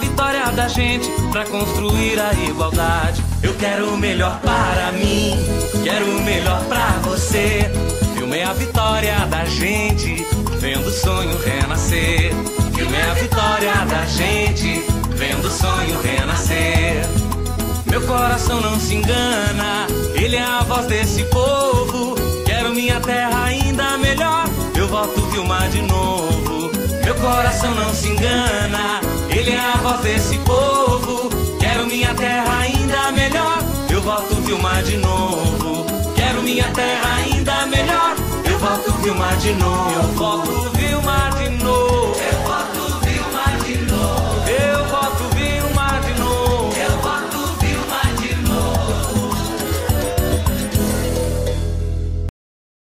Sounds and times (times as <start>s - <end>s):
Music: 0.0s - 52.3s.